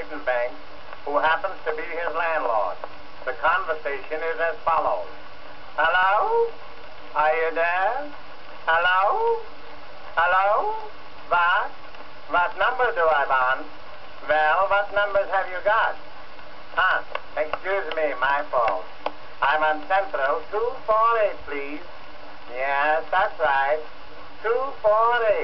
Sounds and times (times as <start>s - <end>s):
Speech: 0.0s - 5.1s, 5.8s - 6.6s, 7.2s - 9.5s, 10.2s - 16.0s, 16.8s - 21.9s, 22.5s - 25.4s.